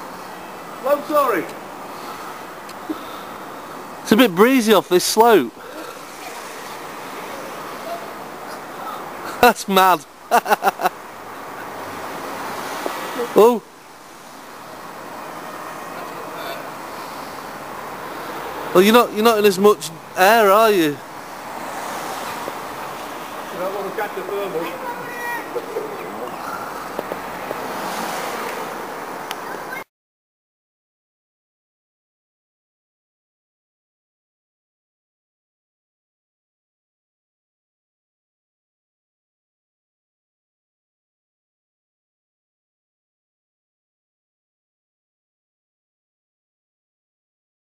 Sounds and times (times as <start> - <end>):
Outside, urban or manmade: 0.0 - 29.9.